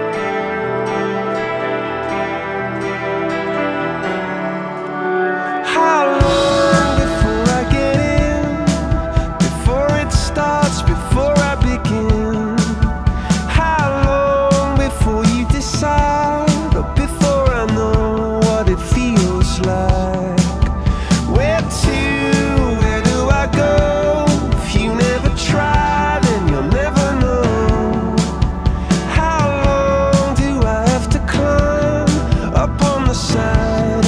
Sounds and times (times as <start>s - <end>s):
Music: 0.0s - 34.0s.